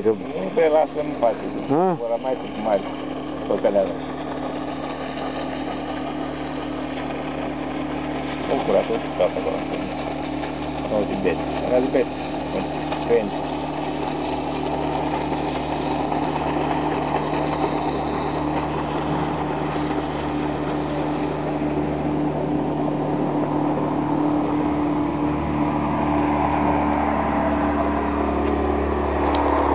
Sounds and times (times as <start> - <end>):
Motorboat, speedboat: 0.0 - 29.7.